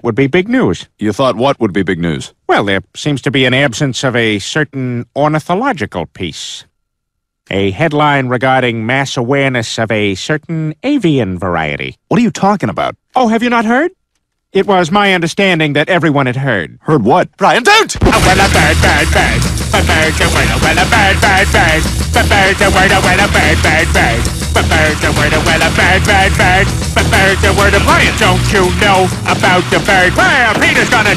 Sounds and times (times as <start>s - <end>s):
Music: 18.0s - 31.1s.